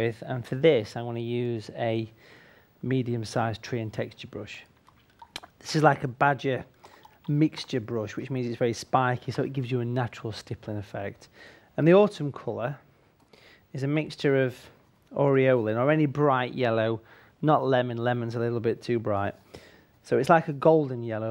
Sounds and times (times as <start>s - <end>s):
Speech: 0.0s - 2.2s, 2.8s - 4.7s, 5.6s - 6.7s, 7.3s - 12.8s, 13.7s - 19.4s, 20.0s - 21.3s.